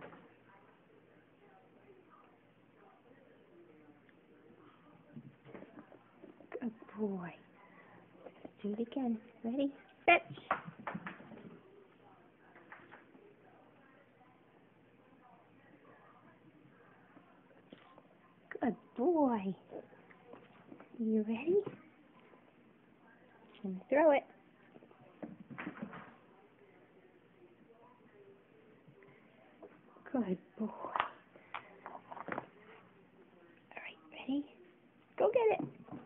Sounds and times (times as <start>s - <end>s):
Speech: 0.0s - 10.5s, 11.5s - 25.3s, 26.0s - 36.0s.